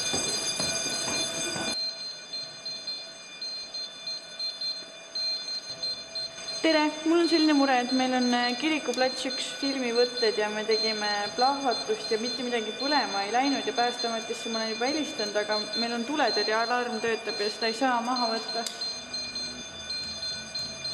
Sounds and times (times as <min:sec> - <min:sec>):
Alarm: 0:00.0 - 0:20.9
Speech: 0:06.6 - 0:18.7.